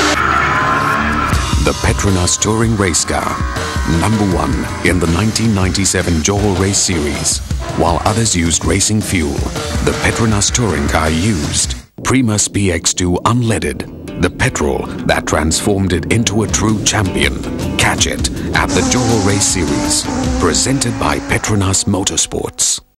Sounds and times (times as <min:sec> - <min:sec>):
Music: 0:00.0 - 0:22.9
Speech: 0:01.6 - 0:22.9.